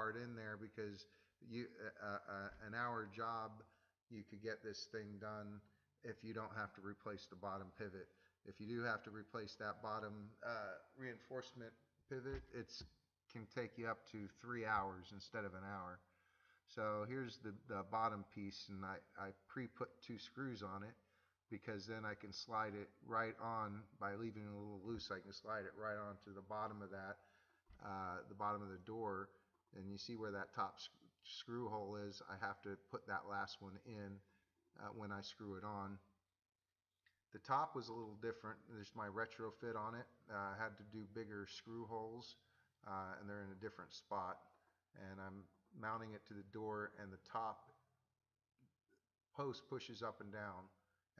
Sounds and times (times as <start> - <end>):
Speech: 0.0 - 16.1, 16.7 - 36.1, 37.4 - 47.8, 49.4 - 50.8.